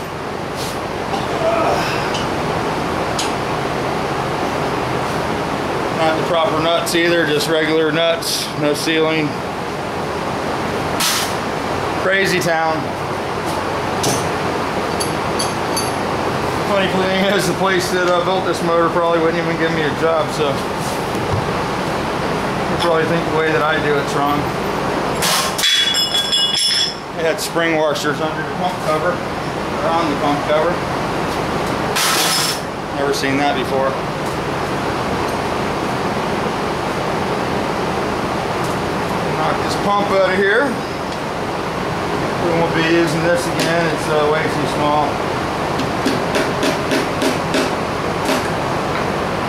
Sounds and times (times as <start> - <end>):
Engine: 0.0 - 49.4
Speech: 6.0 - 9.4, 12.0 - 12.9, 16.6 - 20.6, 22.8 - 24.5, 27.2 - 29.2, 29.8 - 30.8, 32.9 - 34.0, 39.3 - 40.8, 42.4 - 45.2.